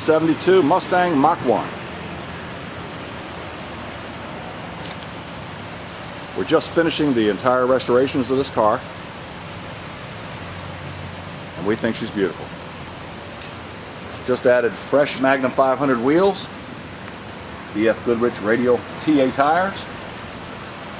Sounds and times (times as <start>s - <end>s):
Speech: 0.0s - 1.7s, 6.4s - 8.9s, 11.6s - 12.5s, 14.2s - 16.5s, 17.7s - 19.9s.